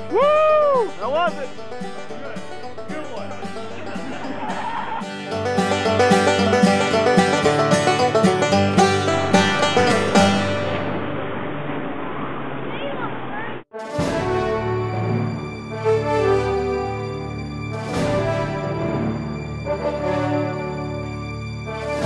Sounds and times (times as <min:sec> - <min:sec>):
Theme music: 0:00.0 - 0:11.6, 0:13.7 - 0:22.0.